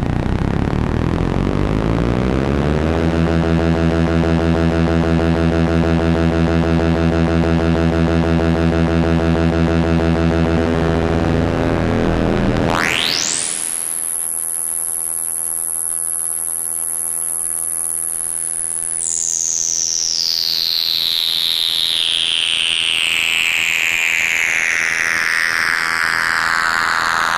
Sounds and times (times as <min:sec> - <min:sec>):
Hum: 0:00.0 - 0:27.3
Mains hum: 0:00.0 - 0:27.3.